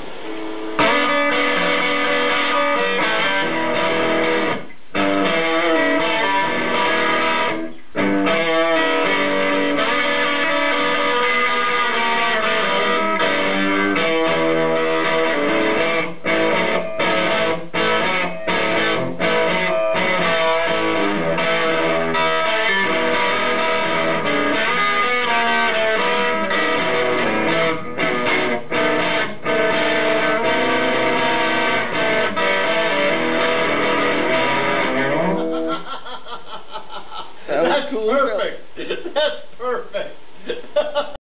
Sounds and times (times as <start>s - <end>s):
Guitar: 0.0s - 36.0s
Speech: 37.5s - 40.2s.